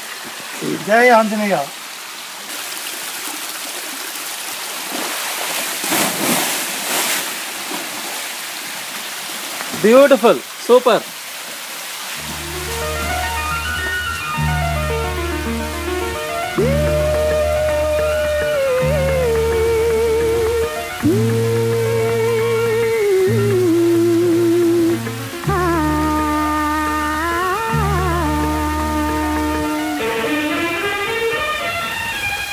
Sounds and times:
Stream: 0.0s - 32.5s.

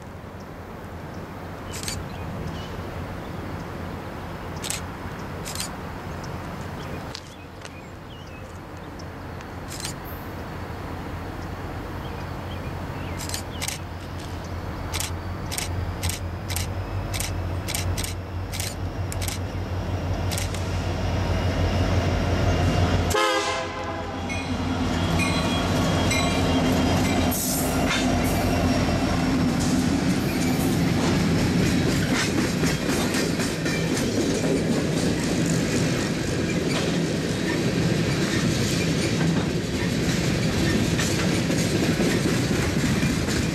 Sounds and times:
Railroad car, train wagon: 0.0s - 43.5s
Train: 0.0s - 43.5s.

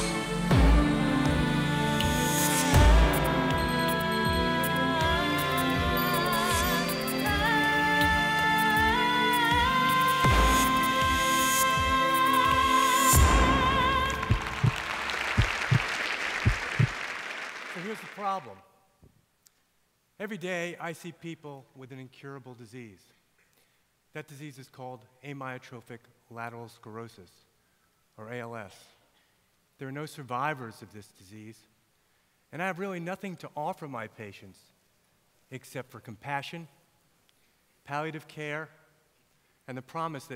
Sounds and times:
Speech: 17.7s - 18.7s, 20.2s - 23.1s, 24.2s - 27.5s, 28.2s - 29.0s, 29.8s - 31.7s, 32.5s - 34.7s, 35.5s - 36.7s, 37.9s - 38.8s, 39.7s - 40.3s.

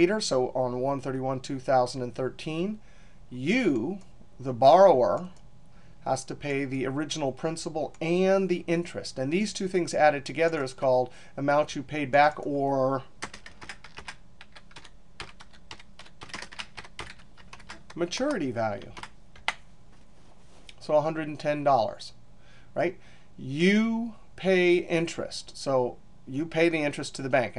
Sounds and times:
Speech: 0.0s - 5.4s, 6.0s - 13.1s, 18.0s - 19.0s, 20.8s - 22.2s, 22.8s - 27.5s
Computer keyboard: 13.2s - 19.6s.

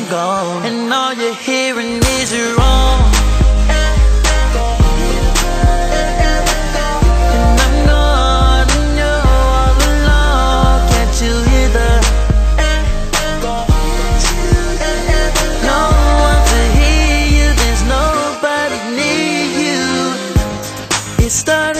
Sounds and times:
Music: 0.0s - 21.7s.

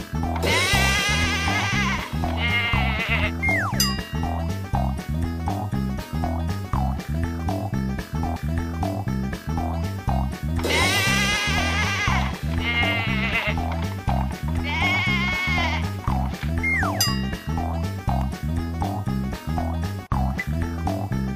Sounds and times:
Music: 0.0s - 21.3s
Bleat: 0.5s - 3.5s, 10.7s - 13.7s, 14.6s - 16.0s.

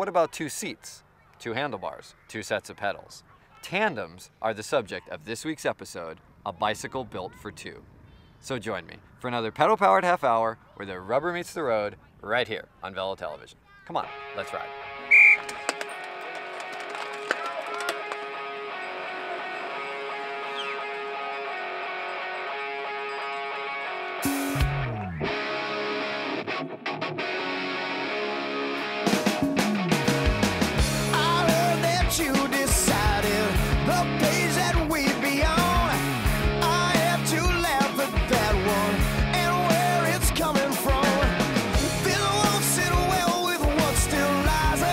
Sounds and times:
Music: 14.1s - 44.9s.

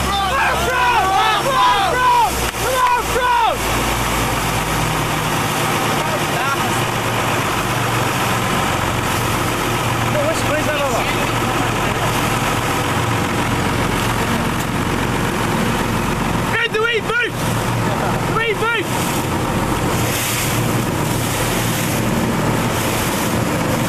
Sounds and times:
Motorboat, speedboat: 0.0s - 23.8s
Speech: 5.8s - 6.9s, 10.1s - 12.3s, 16.5s - 18.9s.

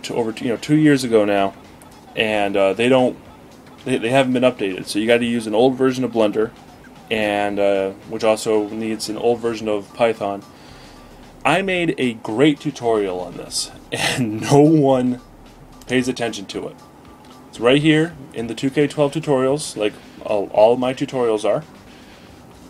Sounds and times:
Speech: 0.0s - 1.5s, 2.2s - 3.2s, 3.8s - 6.5s, 7.1s - 10.4s, 11.5s - 15.2s, 15.9s - 16.8s, 17.6s - 21.7s
Music: 0.0s - 22.6s.

